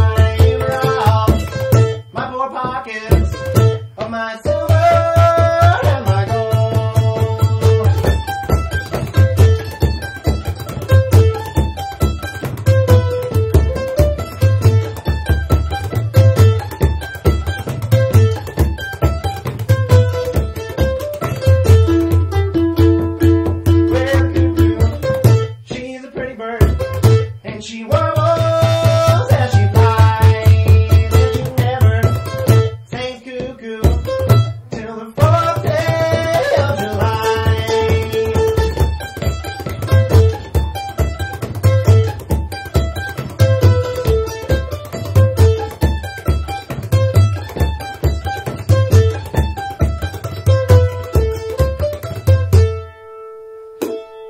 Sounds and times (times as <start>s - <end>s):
Singing: 0.0s - 1.6s, 2.2s - 3.4s, 4.0s - 7.9s, 25.6s - 26.8s, 27.4s - 38.8s
Drum: 0.0s - 52.8s, 53.8s - 54.1s
Mandolin: 0.0s - 54.2s.